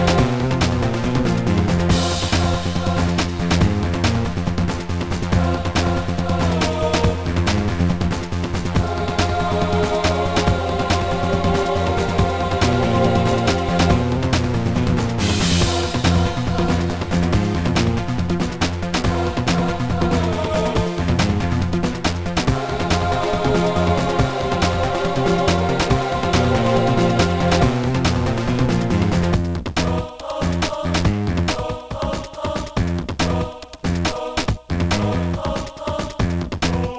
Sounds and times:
Angry music: 0.0s - 36.9s
Independent music: 0.0s - 36.9s.

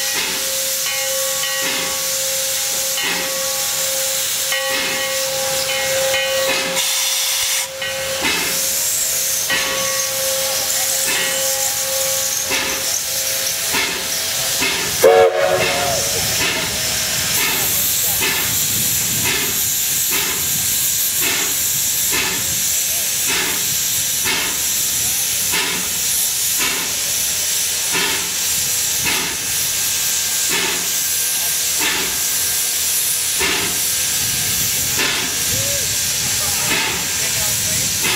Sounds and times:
Train whistle: 6.7s - 7.7s, 15.0s - 16.5s.

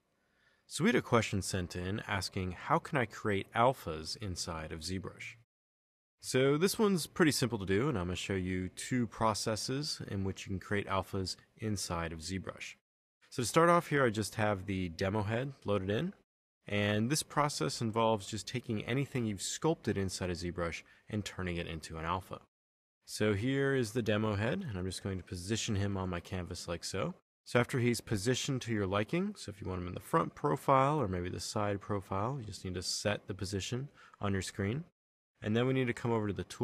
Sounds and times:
Speech: 0.7s - 5.4s, 6.2s - 22.5s, 23.1s - 36.6s.

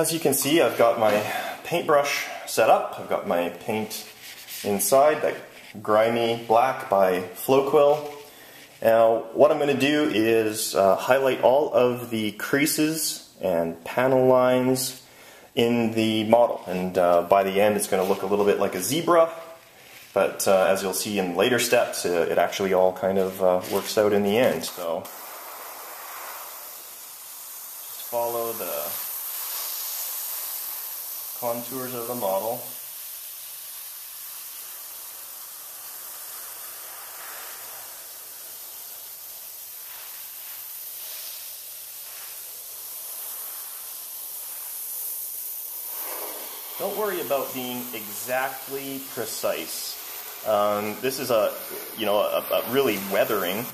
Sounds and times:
Speech: 0.0s - 8.2s, 8.8s - 15.0s, 15.6s - 19.6s, 20.2s - 25.1s, 28.0s - 29.0s, 31.4s - 32.7s, 46.8s - 53.7s
Inside, small room: 0.0s - 53.7s.

